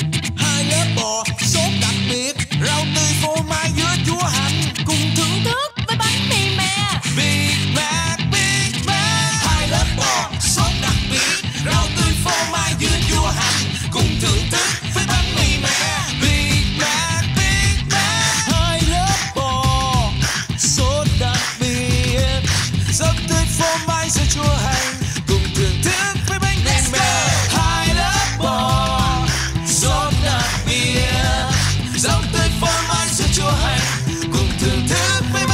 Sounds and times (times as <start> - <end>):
Music: 0.0 - 35.5.